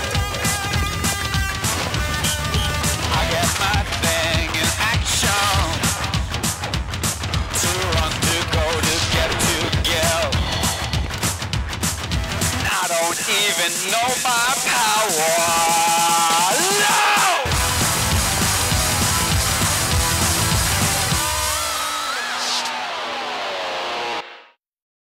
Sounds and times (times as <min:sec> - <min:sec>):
Music: 0:00.0 - 0:24.6.